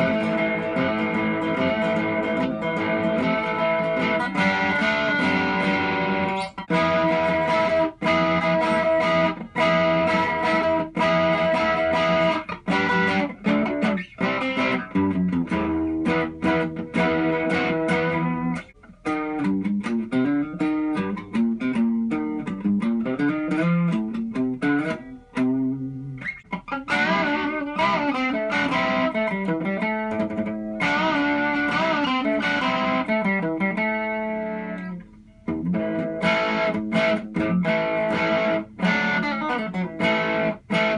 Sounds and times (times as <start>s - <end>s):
Electric guitar: 0.0s - 40.9s
Strum: 0.0s - 40.9s.